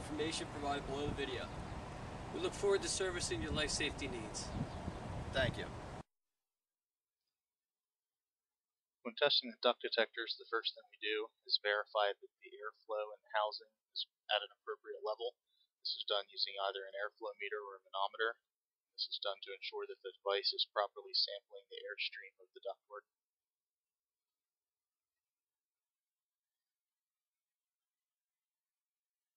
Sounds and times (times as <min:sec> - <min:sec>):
Speech: 0:00.0 - 0:01.5, 0:02.4 - 0:04.5, 0:05.4 - 0:05.7, 0:09.1 - 0:15.3, 0:15.9 - 0:18.4, 0:19.0 - 0:23.0.